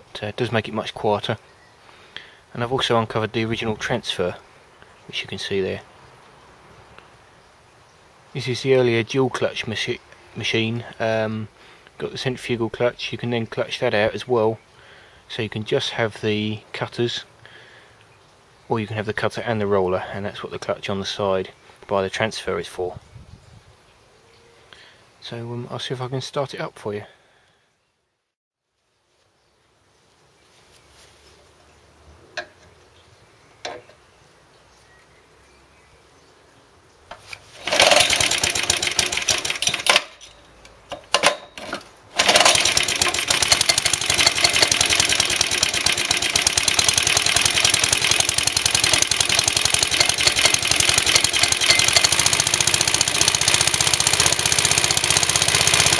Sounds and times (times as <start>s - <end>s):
Speech: 0.1s - 1.4s, 2.5s - 4.4s, 5.1s - 5.9s, 8.4s - 14.6s, 15.3s - 17.3s, 18.7s - 23.0s, 25.2s - 27.2s.